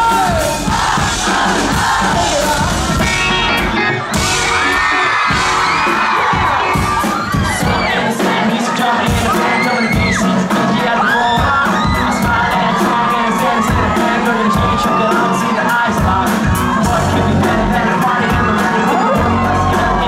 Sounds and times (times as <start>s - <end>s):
Music: 0.0s - 20.0s.